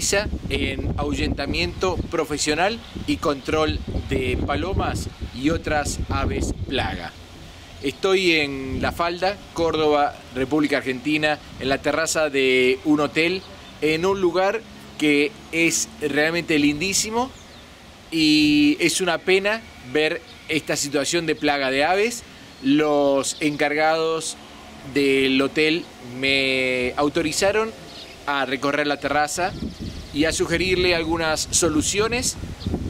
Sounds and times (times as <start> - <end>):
Speech: 0.0 - 7.2, 7.8 - 17.4, 18.1 - 29.6, 30.2 - 32.4
Outside, rural or natural: 0.0 - 32.8
Bird: 27.4 - 28.4.